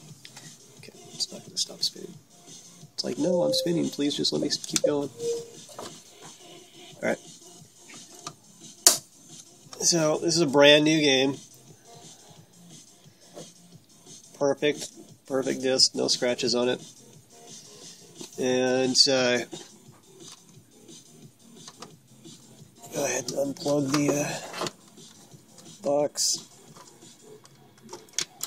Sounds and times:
Music: 0:00.0 - 0:28.4
Speech: 0:00.9 - 0:02.2, 0:03.0 - 0:05.2, 0:09.8 - 0:11.4, 0:14.4 - 0:16.8, 0:18.4 - 0:19.5, 0:22.9 - 0:24.4, 0:25.8 - 0:26.4.

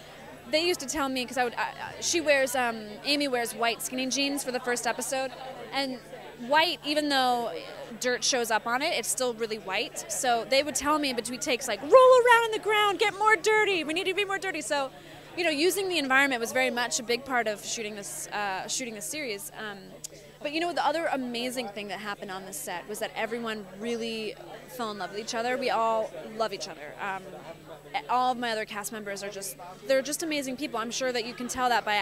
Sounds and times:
Speech: 0:00.0 - 0:32.0.

